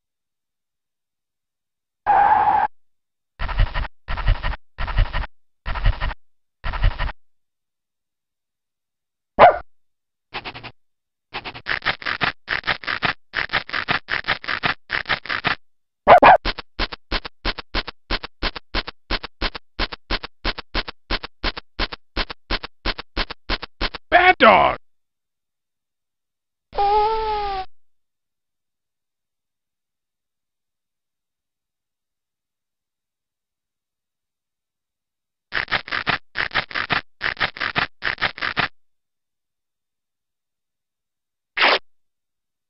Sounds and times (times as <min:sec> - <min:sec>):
Bow-wow: 0:09.4 - 0:09.6, 0:16.1 - 0:16.5.